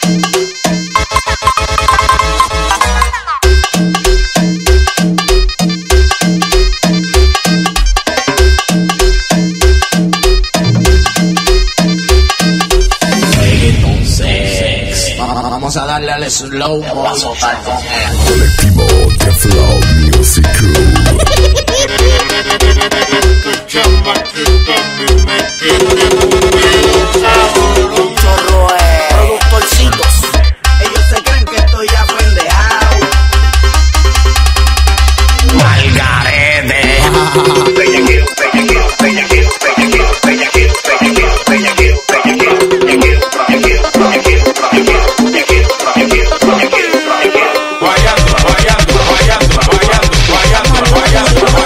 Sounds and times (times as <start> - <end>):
Happy music: 0.0 - 51.6.